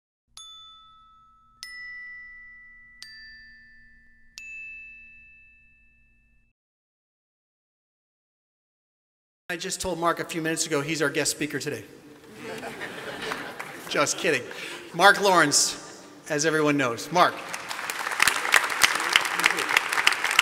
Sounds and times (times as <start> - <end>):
Ding: 0.4 - 6.6.